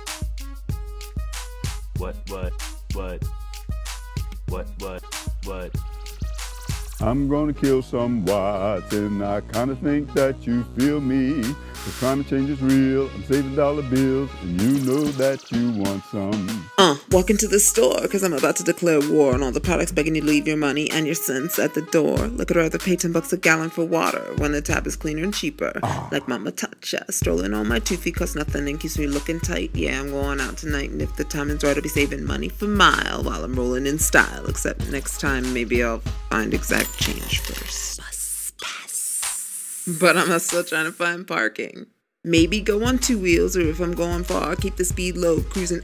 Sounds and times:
Music: 0:00.0 - 0:41.5, 0:42.3 - 0:45.8.

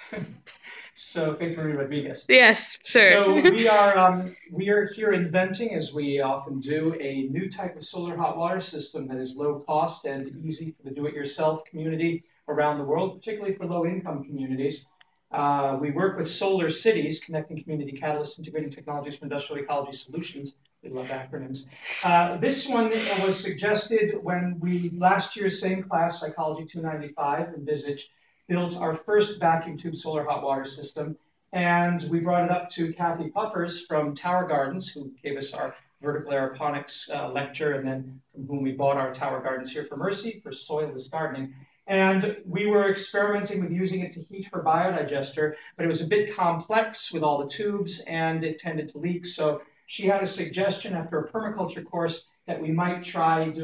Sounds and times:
Speech: 0:00.0 - 0:53.6.

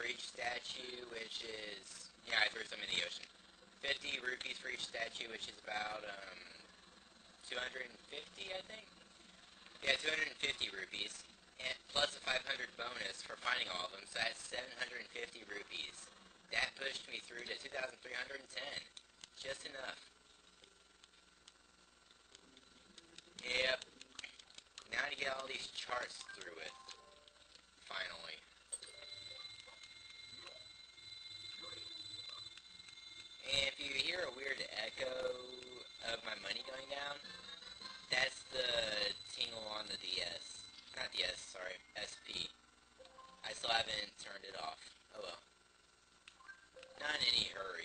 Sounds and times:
Speech: 0:00.0 - 0:06.7, 0:07.4 - 0:09.0, 0:09.8 - 0:20.1, 0:22.8 - 0:27.0, 0:27.9 - 0:28.5, 0:33.4 - 0:42.6, 0:43.4 - 0:45.5, 0:47.0 - 0:47.8.

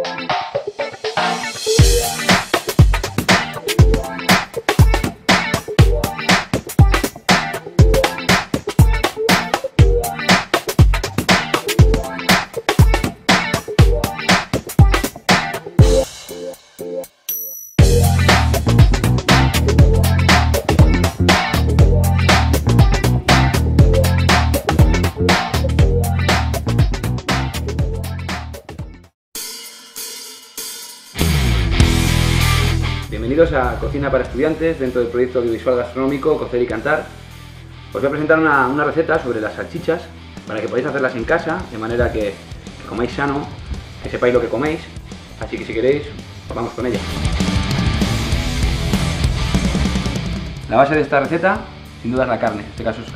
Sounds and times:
Music: 0:00.0 - 0:53.1.

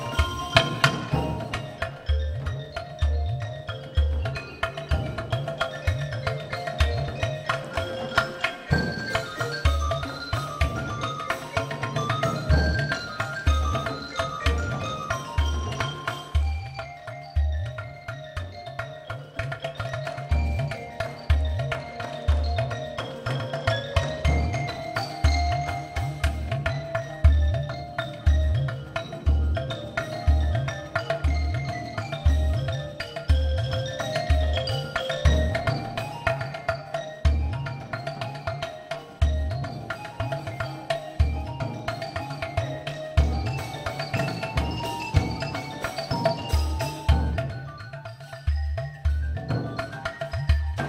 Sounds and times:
Percussion: 0:00.0 - 0:50.8.

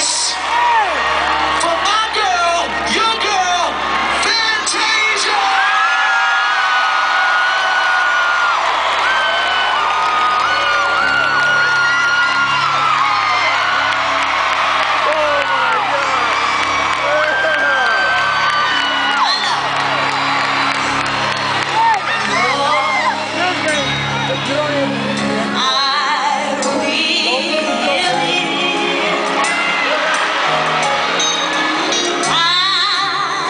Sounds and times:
Music: 0:00.0 - 0:33.5.

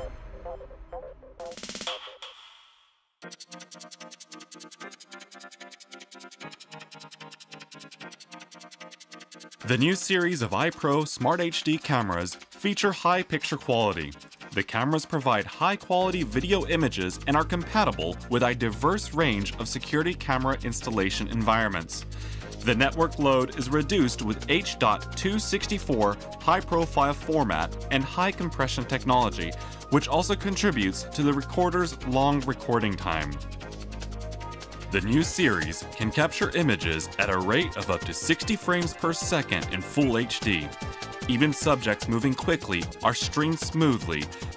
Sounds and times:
Music: 0:00.0 - 0:44.5
Speech: 0:09.7 - 0:22.0, 0:22.6 - 0:33.4, 0:35.0 - 0:44.4.

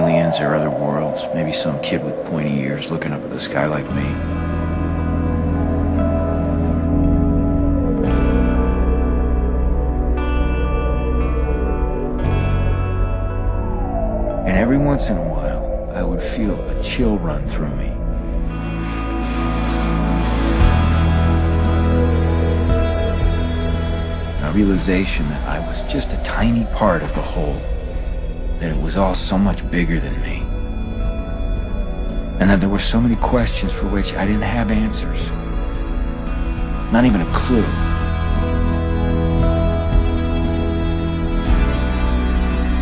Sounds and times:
Speech: 0:00.0 - 0:04.2, 0:14.5 - 0:18.0, 0:24.4 - 0:27.6, 0:28.6 - 0:30.5, 0:32.4 - 0:35.4, 0:36.9 - 0:37.8
Music: 0:00.0 - 0:42.8.

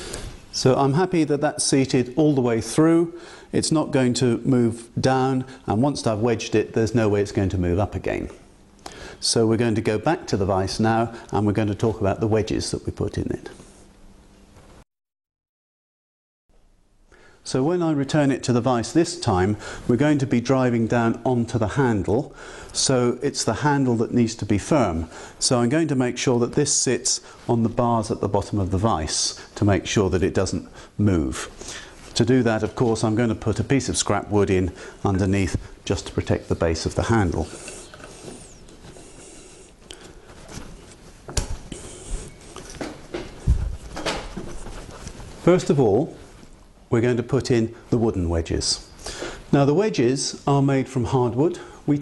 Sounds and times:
Speech: 0:00.5 - 0:08.5, 0:09.2 - 0:13.6, 0:17.4 - 0:37.6, 0:45.4 - 0:46.2, 0:46.9 - 0:48.9, 0:49.5 - 0:52.0.

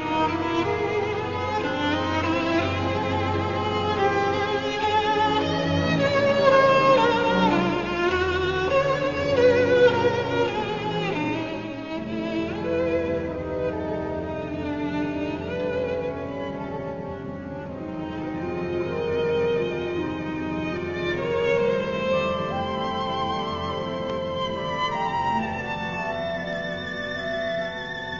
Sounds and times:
Violin, fiddle: 0:00.0 - 0:28.1.

